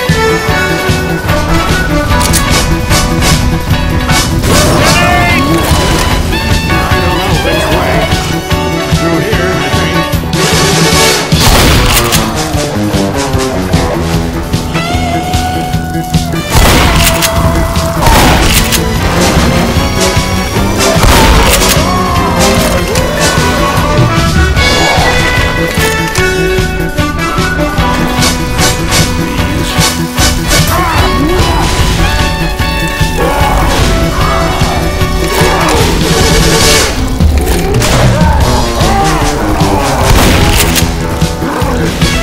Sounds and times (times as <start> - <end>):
Music: 0.0 - 42.2.